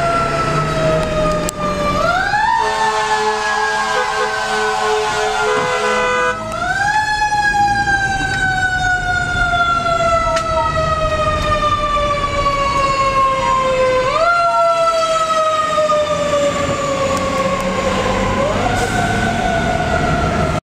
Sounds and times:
Vehicle: 0:00.0 - 0:20.6.

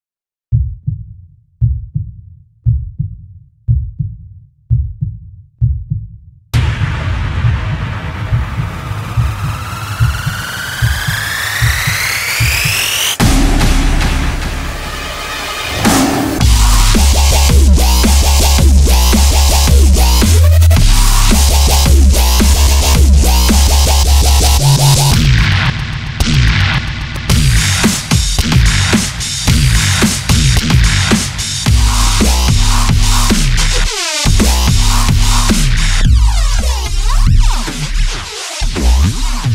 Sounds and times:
Sampler: 0:06.6 - 0:25.2
Electronic music: 0:06.6 - 0:39.5.

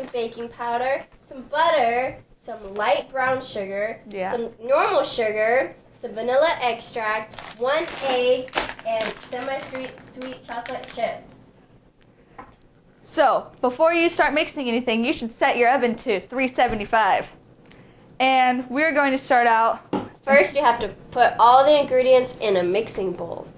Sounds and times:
Speech: 0:00.0 - 0:11.3, 0:13.1 - 0:17.4, 0:18.2 - 0:23.5.

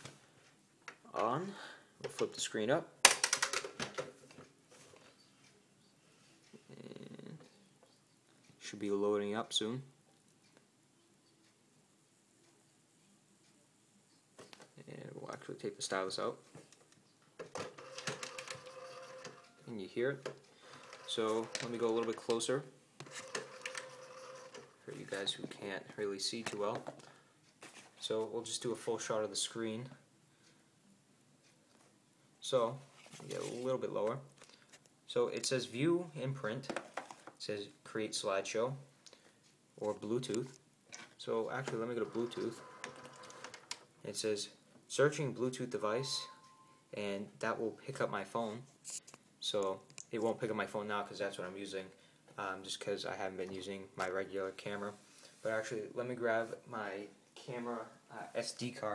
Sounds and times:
Speech: 0:08.6 - 0:09.9, 0:14.8 - 0:16.4, 0:21.1 - 0:22.7, 0:24.9 - 0:26.9, 0:28.0 - 0:30.0, 0:32.4 - 0:34.3, 0:35.1 - 0:36.7, 0:37.4 - 0:38.9, 0:39.8 - 0:40.6, 0:41.2 - 0:42.6, 0:44.0 - 0:46.3, 0:47.0 - 0:48.7, 0:49.4 - 0:58.9.

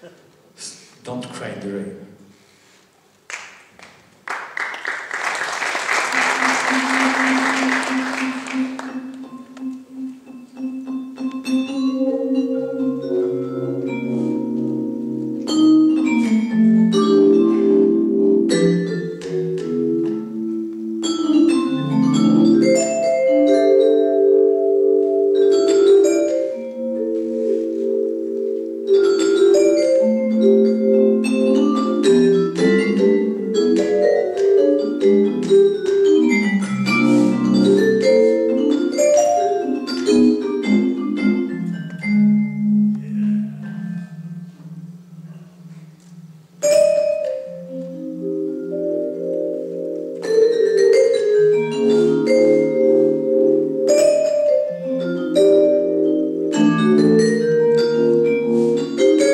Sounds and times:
Music: 0:06.0 - 0:59.3.

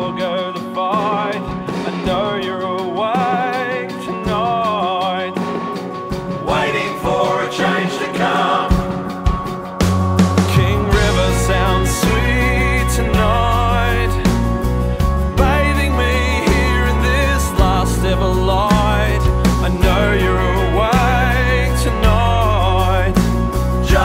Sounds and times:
Music: 0:00.0 - 0:24.0.

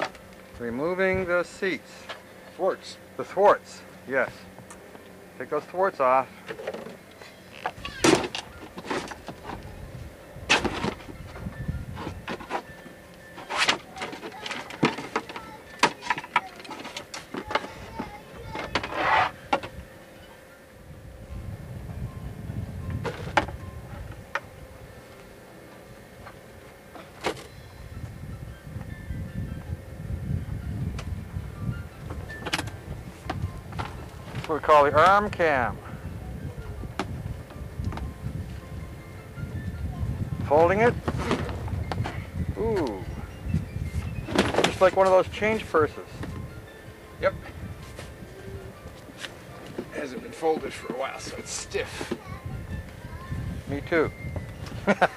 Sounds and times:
Music: 0:07.0 - 0:55.1.

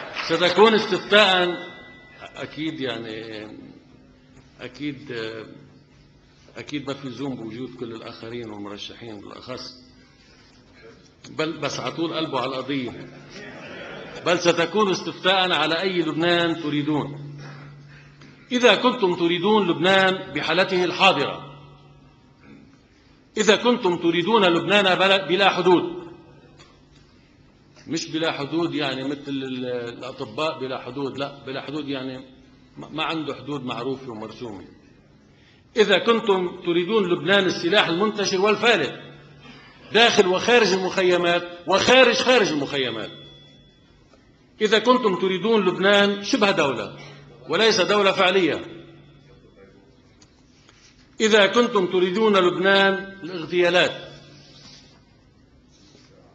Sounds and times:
Male speech, man speaking: 0:00.0 - 0:03.8, 0:04.6 - 0:05.6, 0:06.6 - 0:09.8, 0:11.3 - 0:13.1, 0:14.2 - 0:17.3, 0:18.5 - 0:21.6, 0:23.4 - 0:26.2, 0:27.9 - 0:34.8, 0:35.8 - 0:39.1, 0:39.9 - 0:43.2, 0:44.6 - 0:49.9, 0:51.2 - 0:54.3
Narration, monologue: 0:00.0 - 0:56.3.

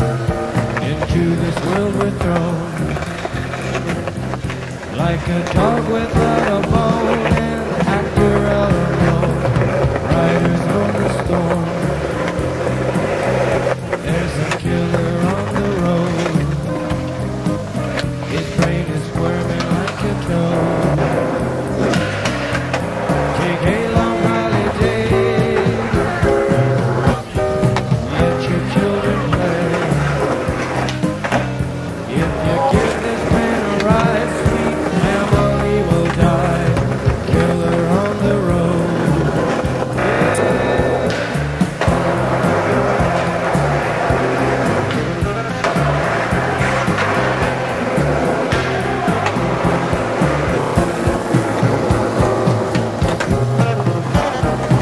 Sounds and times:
Music: 0:00.0 - 0:54.8
Skateboard: 0:00.0 - 0:54.8.

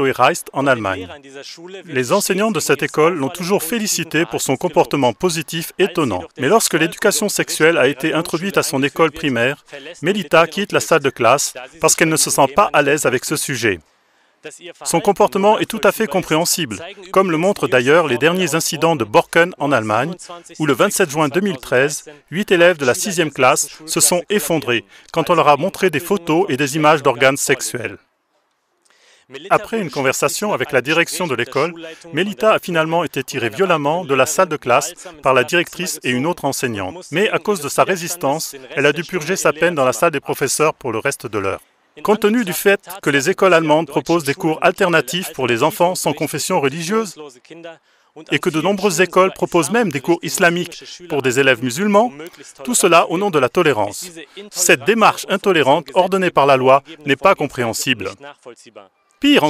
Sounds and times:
Speech: 0:00.0 - 0:13.8, 0:14.5 - 0:28.0, 0:29.3 - 0:59.5.

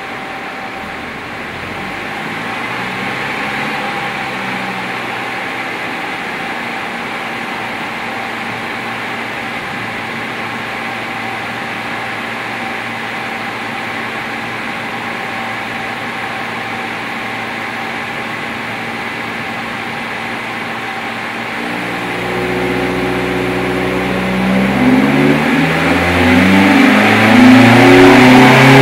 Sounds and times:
Vehicle: 0:00.0 - 0:28.8.

